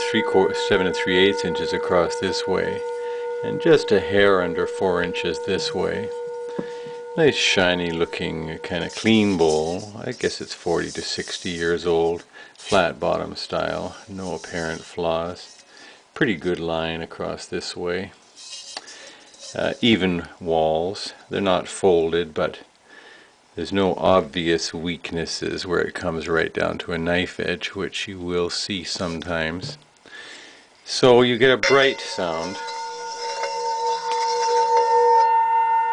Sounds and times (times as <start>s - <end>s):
Speech: 0.0s - 6.1s, 7.2s - 15.6s, 16.2s - 18.2s, 19.5s - 22.7s, 23.6s - 29.8s, 30.8s - 32.6s.